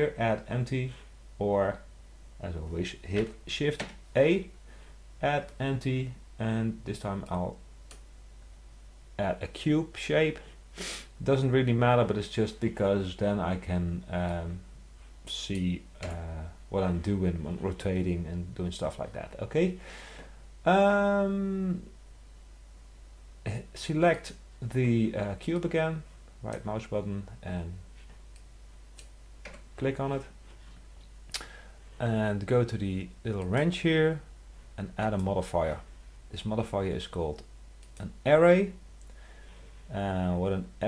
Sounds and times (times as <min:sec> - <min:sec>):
Speech: 0:00.0 - 0:04.6, 0:05.2 - 0:07.6, 0:09.2 - 0:10.4, 0:11.2 - 0:14.7, 0:15.3 - 0:19.8, 0:20.6 - 0:21.9, 0:23.4 - 0:27.8, 0:29.8 - 0:30.4, 0:32.0 - 0:38.8, 0:39.9 - 0:40.8.